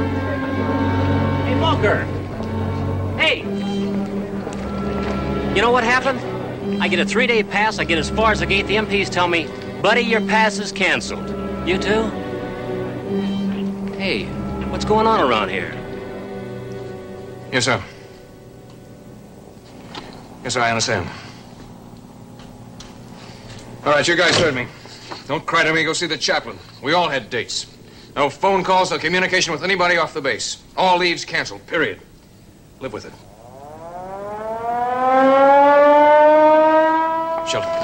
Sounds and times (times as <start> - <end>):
Music: 0.0 - 20.6.